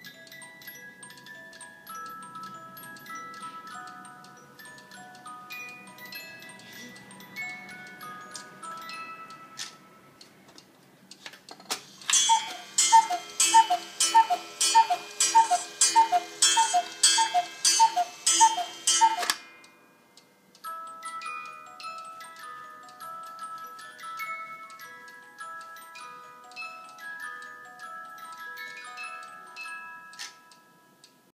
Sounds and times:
Music: 0.0s - 10.4s, 14.1s - 31.3s.

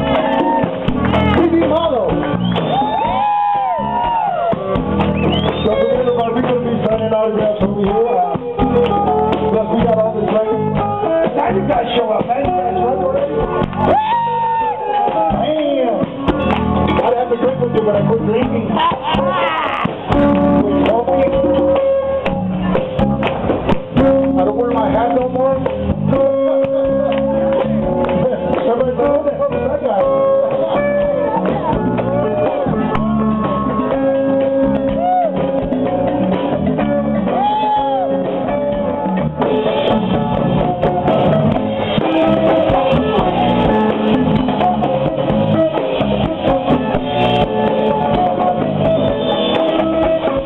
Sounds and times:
Music: 0.0s - 50.4s.

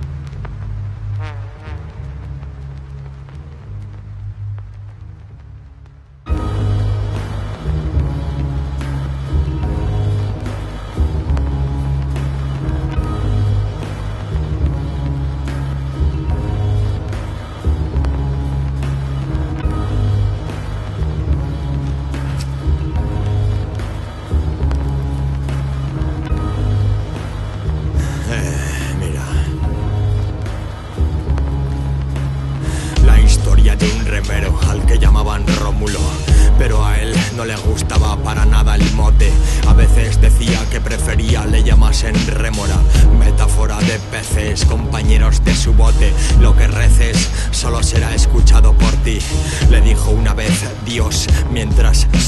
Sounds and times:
Music: 0.0s - 52.2s.

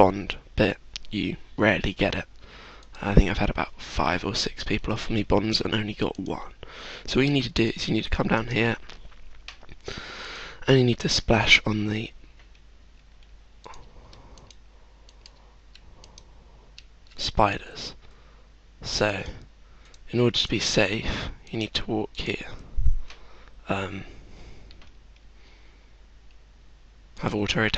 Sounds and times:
Speech: 0.0s - 2.3s, 3.0s - 8.8s, 10.6s - 12.2s, 17.2s - 18.0s, 18.8s - 19.4s, 20.1s - 22.6s, 23.7s - 24.1s, 27.2s - 27.7s.

